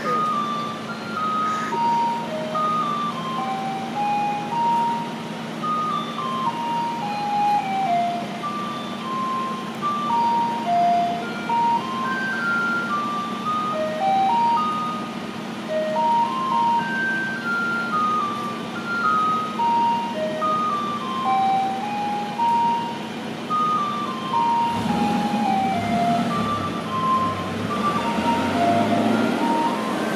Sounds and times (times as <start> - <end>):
Ice cream truck, ice cream van: 0.0 - 30.1
Outside, urban or manmade: 0.0 - 30.1.